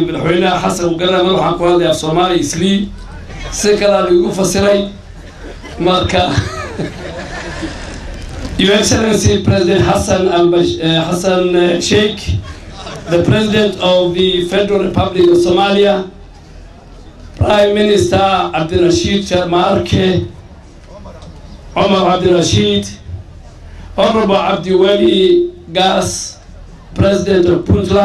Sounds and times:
Male speech, man speaking: 0.0s - 5.0s, 5.8s - 6.5s, 8.6s - 12.4s, 13.1s - 16.2s, 17.4s - 20.4s, 21.8s - 23.1s, 24.0s - 26.4s, 27.0s - 28.0s
Narration, monologue: 0.0s - 7.5s, 8.5s - 28.0s.

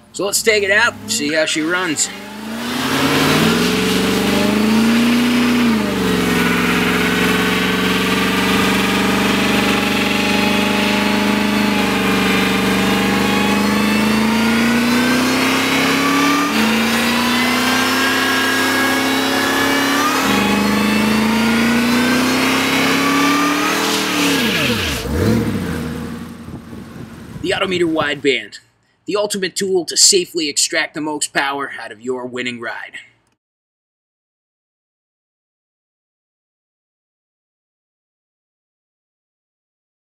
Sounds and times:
Engine: 0.0s - 28.2s
Truck: 0.0s - 29.0s
Outside, rural or natural: 0.0s - 29.3s
Speech: 0.2s - 2.2s, 27.4s - 33.2s.

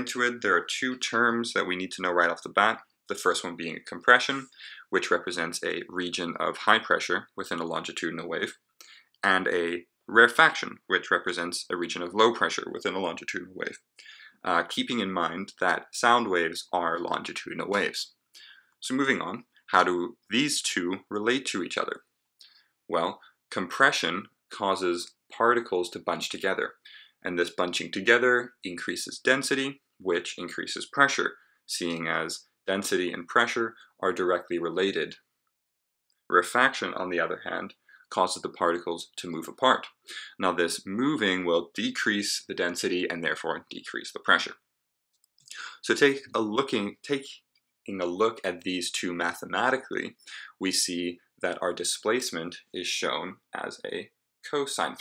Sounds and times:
Speech: 0.0s - 8.6s, 9.2s - 22.0s, 22.9s - 35.2s, 36.3s - 44.6s, 45.5s - 55.0s.

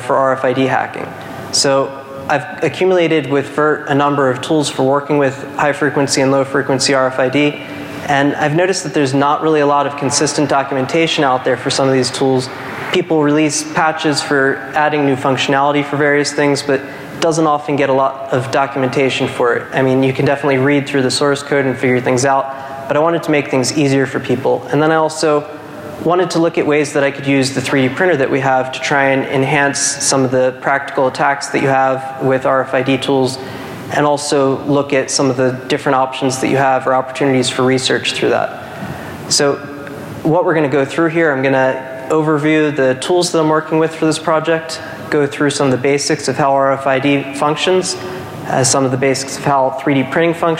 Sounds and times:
Speech: 0.0s - 50.5s.

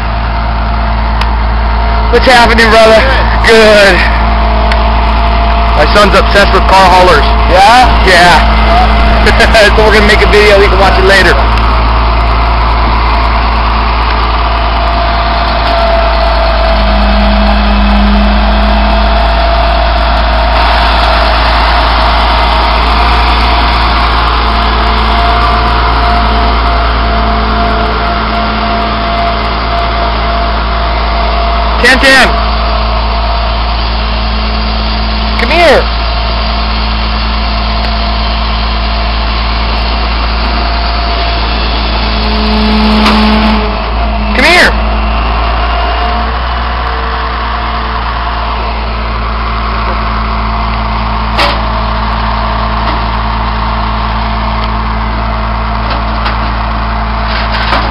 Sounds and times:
Vehicle: 0.0s - 57.9s
Speech: 2.1s - 4.2s, 5.8s - 11.5s, 31.8s - 32.4s, 35.4s - 35.9s, 44.4s - 44.8s.

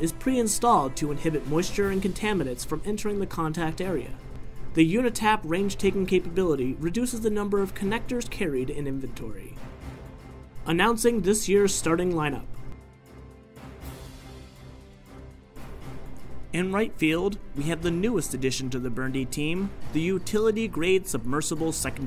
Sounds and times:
Speech: 0.0s - 4.2s, 4.8s - 9.6s, 10.7s - 12.5s, 16.6s - 22.0s
Music: 0.0s - 22.0s.

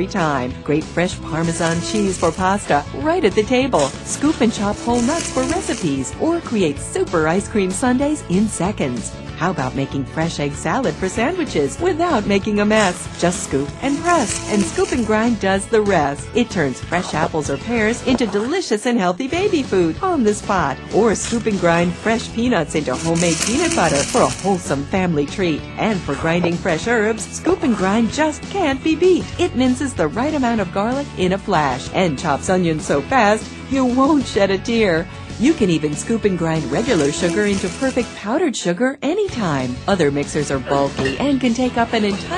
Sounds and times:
Music: 0.0s - 42.3s
Speech: 0.0s - 42.3s.

